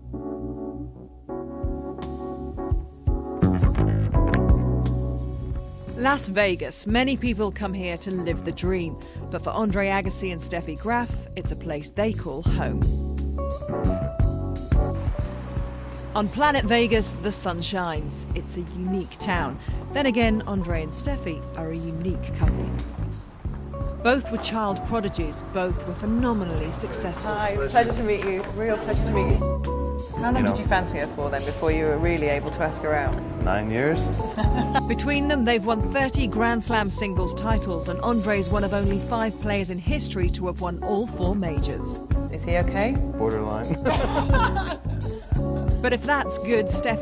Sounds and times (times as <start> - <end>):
Music: 0.0 - 47.0
Speech: 30.2 - 32.6.